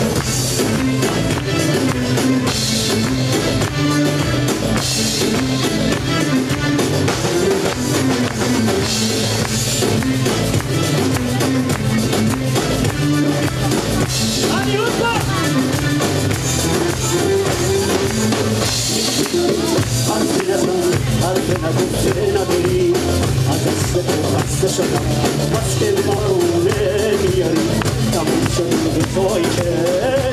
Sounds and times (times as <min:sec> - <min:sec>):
Funk: 0:00.0 - 0:30.3
Independent music: 0:00.0 - 0:30.3
Ska: 0:00.0 - 0:30.3
Soul music: 0:00.0 - 0:30.3
Speech: 0:13.4 - 0:15.9.